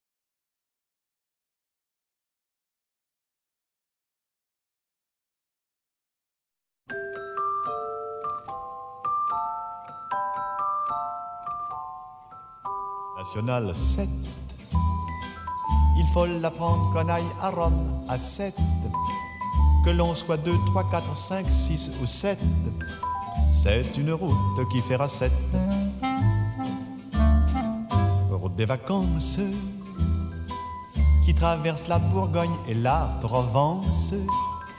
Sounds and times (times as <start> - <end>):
Music: 6.9 - 34.7.